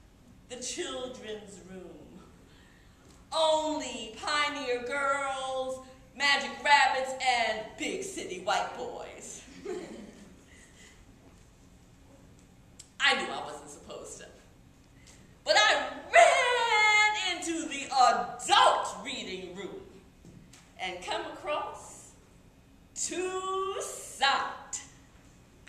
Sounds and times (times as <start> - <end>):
Speech: 0.5 - 2.3, 3.3 - 9.5, 13.0 - 14.5, 15.5 - 20.0, 20.8 - 22.2, 23.0 - 24.9.